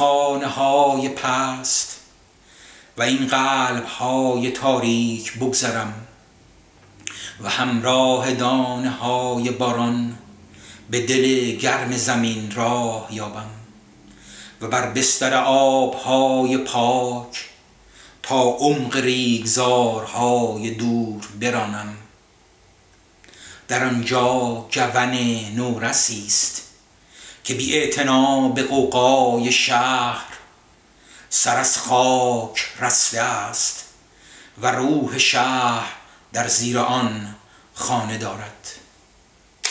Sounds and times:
Speech: 0:00.0 - 0:02.0, 0:03.0 - 0:06.2, 0:07.4 - 0:10.2, 0:10.9 - 0:13.7, 0:14.6 - 0:17.5, 0:18.3 - 0:22.1, 0:23.7 - 0:26.7, 0:27.5 - 0:30.5, 0:31.3 - 0:33.9, 0:34.6 - 0:38.9
Inside, small room: 0:00.0 - 0:39.7.

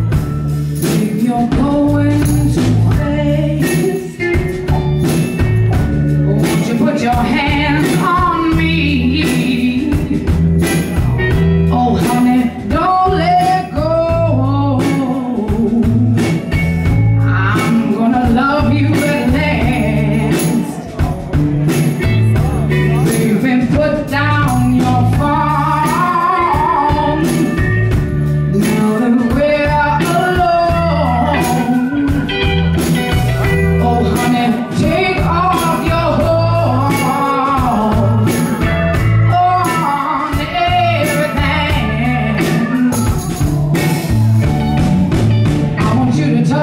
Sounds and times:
Music: 0:00.0 - 0:46.6.

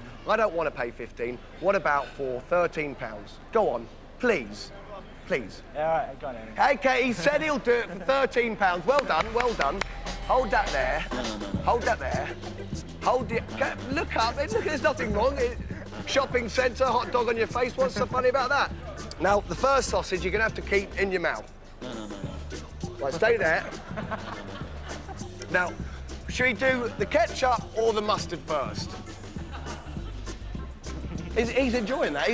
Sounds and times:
Speech: 0:00.3 - 0:12.3, 0:13.0 - 0:21.5, 0:23.0 - 0:23.8, 0:25.5 - 0:29.0, 0:31.3 - 0:32.3.

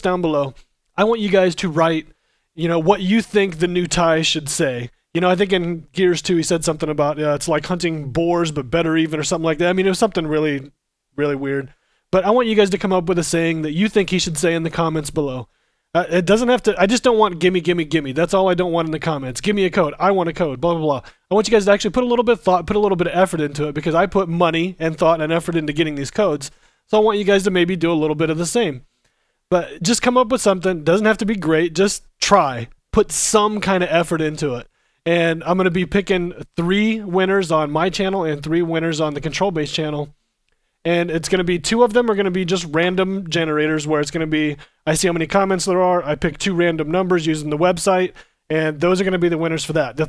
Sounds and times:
Speech: 0:00.0 - 0:28.9, 0:29.5 - 0:40.2, 0:40.9 - 0:50.0.

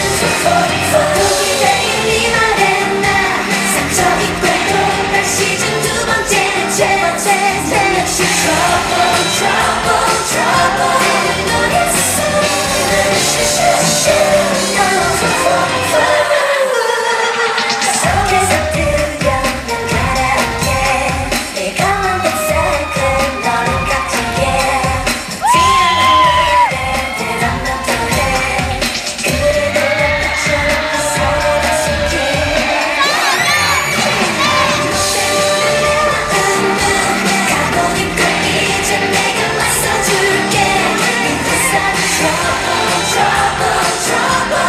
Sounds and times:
Music: 0:00.0 - 0:44.6.

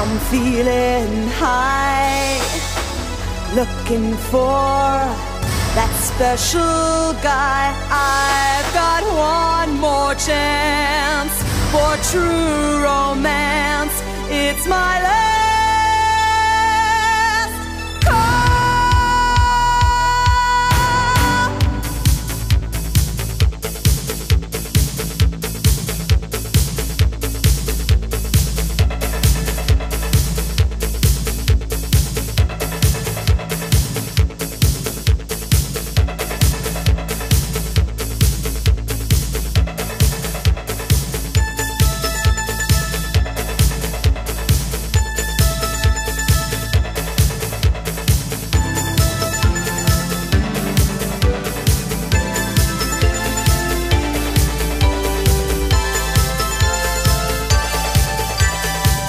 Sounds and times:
Rhythm and blues: 0:00.0 - 0:59.0.

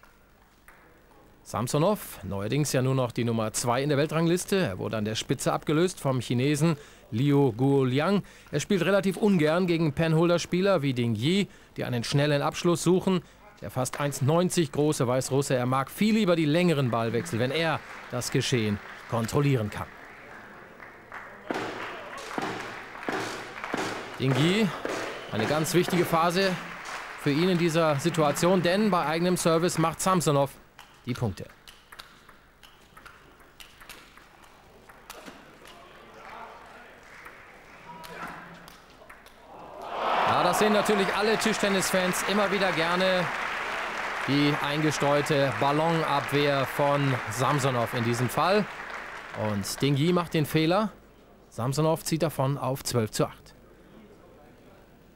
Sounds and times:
Speech: 0:01.2 - 0:19.9, 0:24.2 - 0:26.6, 0:27.2 - 0:31.5, 0:40.3 - 0:43.3, 0:44.3 - 0:48.7, 0:49.4 - 0:55.0.

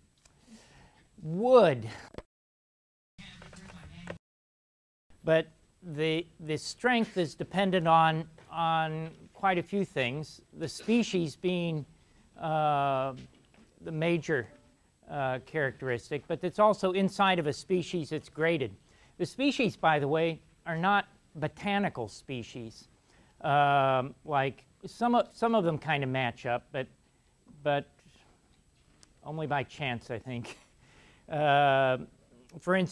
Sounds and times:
Speech: 0:01.2 - 0:02.1, 0:05.2 - 0:27.0, 0:27.6 - 0:28.3, 0:29.2 - 0:30.6, 0:31.3 - 0:32.9.

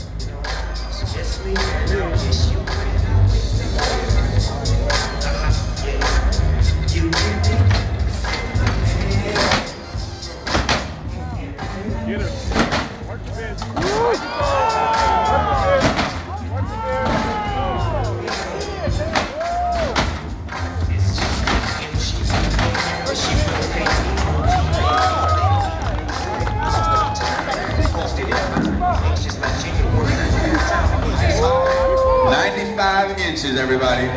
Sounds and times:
Music: 0:00.0 - 0:34.1
Speech: 0:11.1 - 0:19.2, 0:22.8 - 0:34.1.

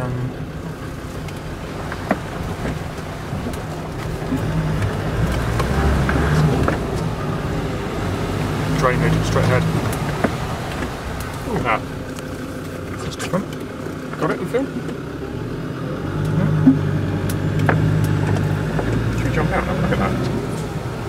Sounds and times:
Outside, urban or manmade: 0:00.0 - 0:21.0
Vehicle: 0:00.0 - 0:21.0
Speech: 0:08.7 - 0:09.8, 0:11.4 - 0:11.9, 0:12.9 - 0:13.6, 0:14.2 - 0:14.8, 0:19.1 - 0:20.6.

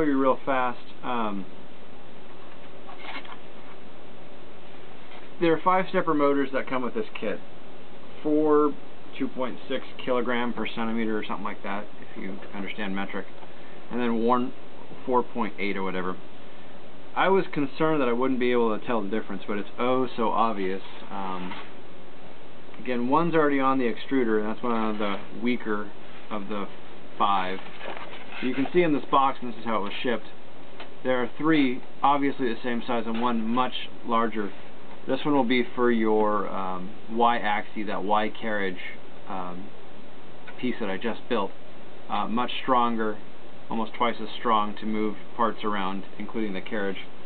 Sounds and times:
Speech: 0:00.0 - 0:01.5, 0:05.4 - 0:07.5, 0:08.2 - 0:16.3, 0:17.2 - 0:21.7, 0:22.8 - 0:30.4, 0:31.0 - 0:39.8, 0:40.5 - 0:47.2.

